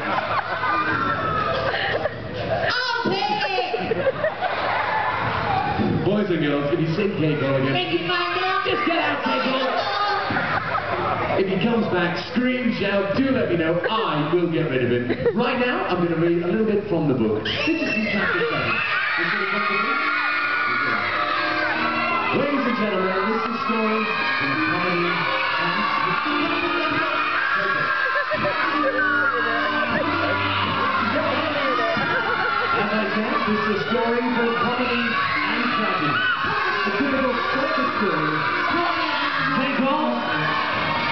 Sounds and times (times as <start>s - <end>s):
Cheering: 0.0s - 11.7s, 17.4s - 41.1s
Crowd: 0.0s - 41.1s.